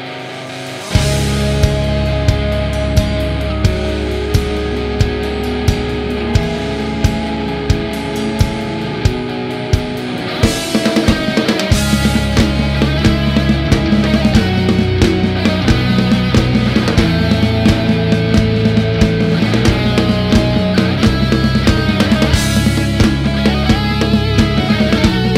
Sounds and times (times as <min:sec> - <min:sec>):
Music: 0:00.0 - 0:25.3.